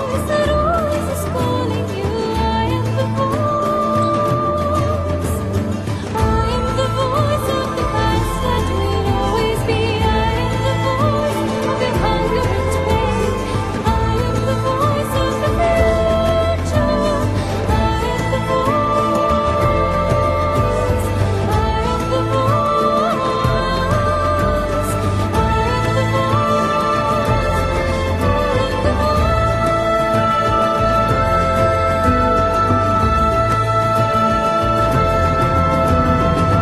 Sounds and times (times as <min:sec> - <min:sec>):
Theme music: 0:00.1 - 0:36.6.